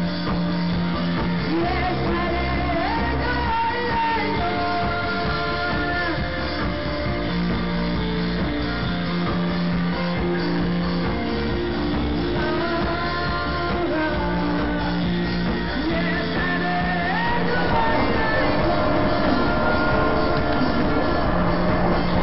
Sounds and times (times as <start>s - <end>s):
Inside, large room or hall: 0.0s - 22.2s
Inside, public space: 0.0s - 22.2s
Music: 0.0s - 22.2s.